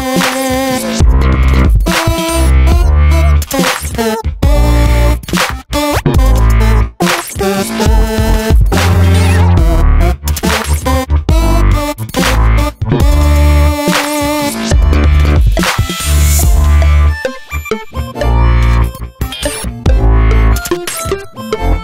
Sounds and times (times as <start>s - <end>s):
Music: 0.0s - 21.8s.